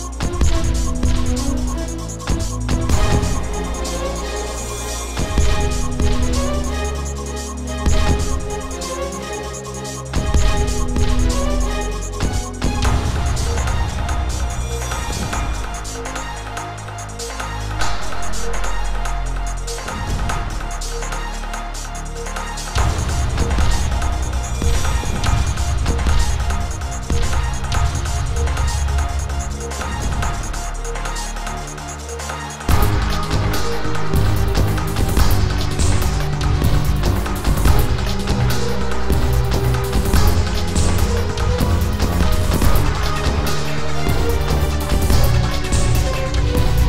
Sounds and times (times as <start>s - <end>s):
Music: 0.0s - 46.8s.